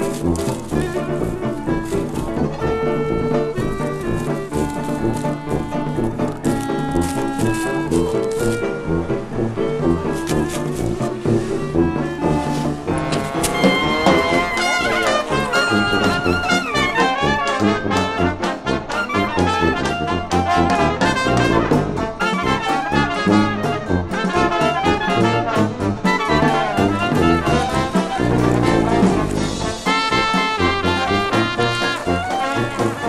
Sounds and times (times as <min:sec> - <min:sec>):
Funny music: 0:00.0 - 0:33.0.